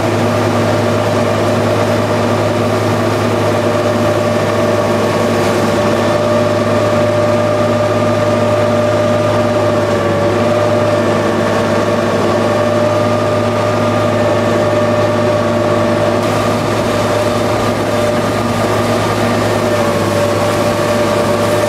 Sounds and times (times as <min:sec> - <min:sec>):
Pump (liquid): 0:00.0 - 0:21.6.